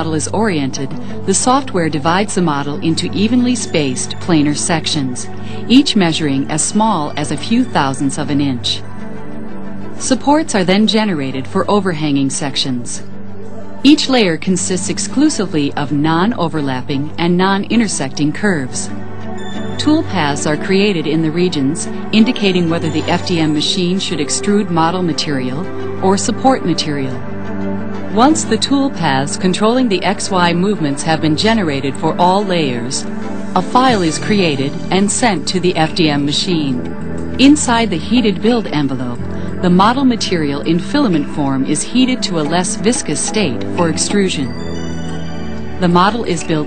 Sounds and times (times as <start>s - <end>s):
Speech: 0.0s - 8.8s, 10.0s - 13.0s, 13.8s - 18.9s, 19.8s - 27.2s, 28.2s - 33.0s, 33.6s - 36.8s, 37.4s - 44.6s, 45.8s - 46.6s
Music: 0.0s - 46.6s.